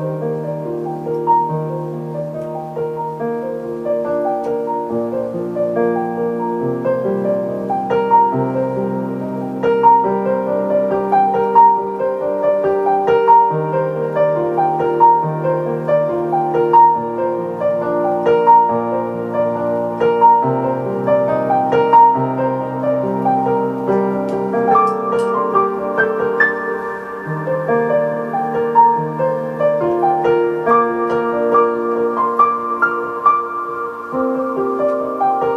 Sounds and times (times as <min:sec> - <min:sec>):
Music: 0:00.0 - 0:35.5.